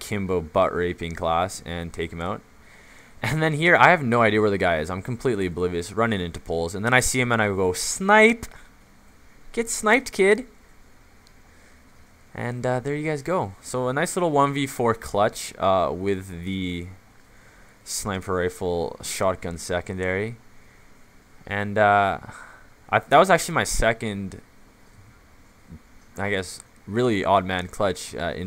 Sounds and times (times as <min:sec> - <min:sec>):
Speech: 0:00.0 - 0:02.4, 0:03.2 - 0:08.5, 0:09.5 - 0:10.6, 0:12.4 - 0:17.0, 0:17.9 - 0:20.4, 0:21.5 - 0:24.4, 0:26.2 - 0:28.4.